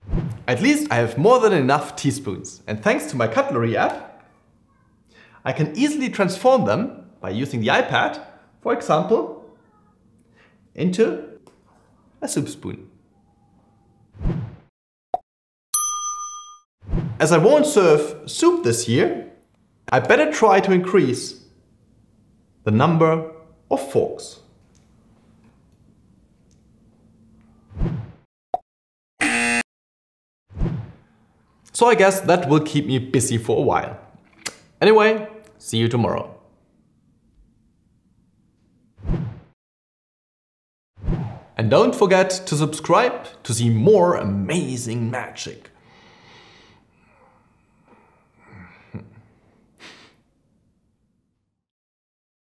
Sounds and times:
Speech: 0.5s - 4.2s, 5.4s - 9.9s, 10.8s - 11.4s, 12.2s - 13.0s, 17.2s - 21.5s, 22.7s - 24.5s, 31.7s - 34.1s, 34.8s - 36.5s, 41.6s - 45.8s.

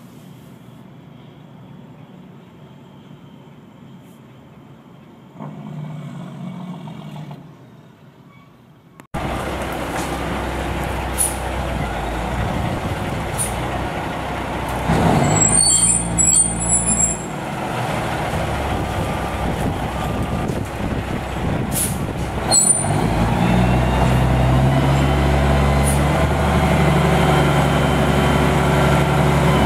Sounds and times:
Truck: 0.0s - 29.6s.

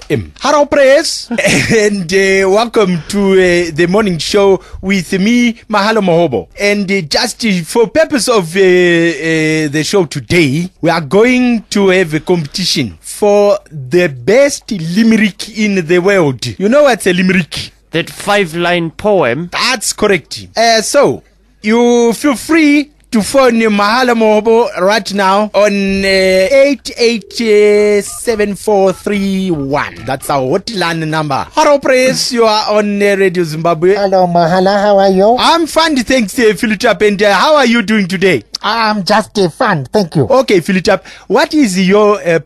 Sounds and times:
Speech: 0.0s - 42.4s.

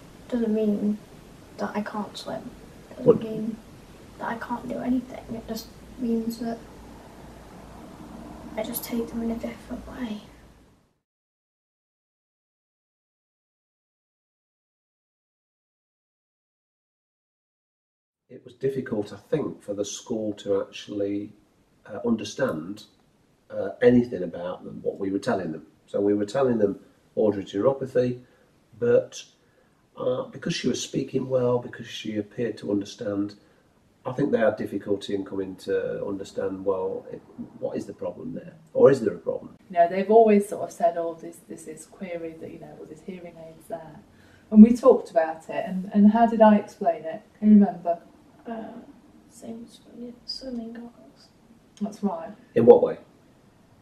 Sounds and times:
Speech: 0.3s - 1.0s, 1.6s - 3.6s, 4.2s - 6.6s, 8.6s - 10.3s, 18.3s - 21.3s, 21.9s - 22.8s, 23.5s - 28.2s, 28.8s - 29.2s, 30.0s - 33.4s, 34.1s - 48.8s, 49.4s - 51.2s, 51.8s - 53.0s.

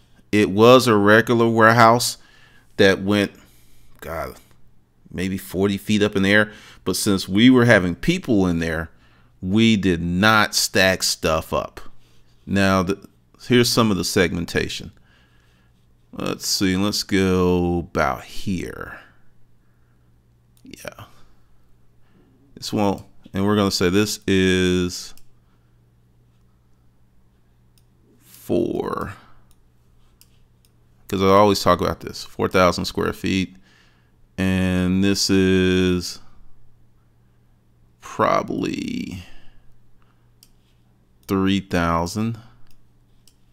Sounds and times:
Narration, monologue: 0.0s - 43.5s.

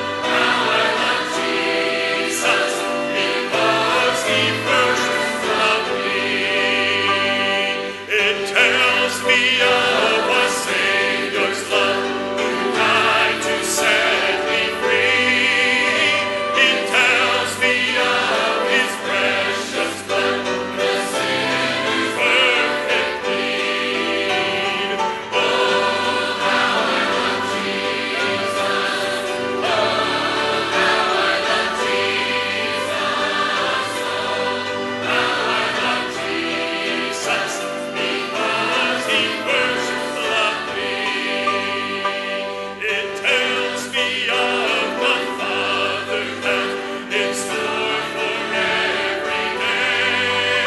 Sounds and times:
Choir: 0.0s - 50.6s
Male singing: 8.1s - 11.8s, 42.8s - 46.6s.

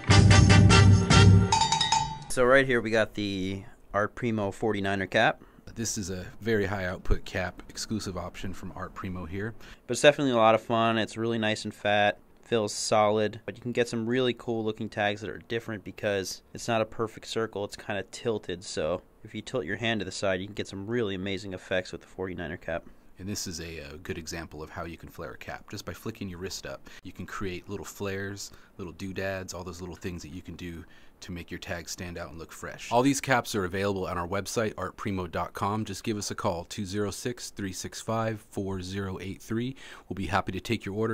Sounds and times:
Speech: 2.3s - 41.1s.

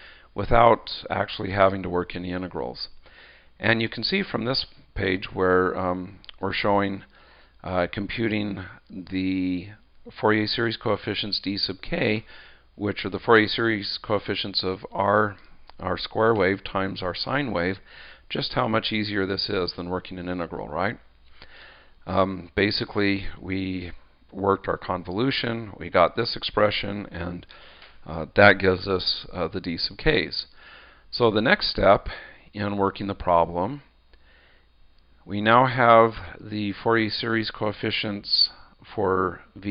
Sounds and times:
Speech: 0.4s - 3.0s, 3.6s - 21.1s, 22.0s - 30.5s, 31.1s - 33.9s, 35.2s - 39.7s.

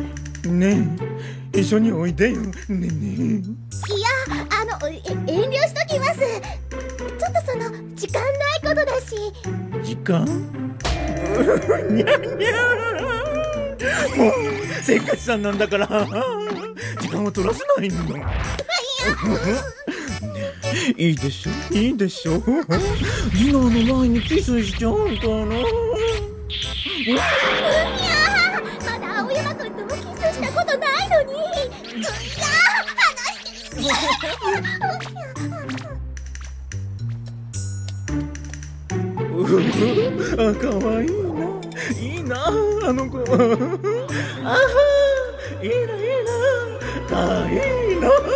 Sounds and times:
Music: 0.0s - 48.3s
Speech: 20.9s - 26.2s, 39.3s - 43.4s.

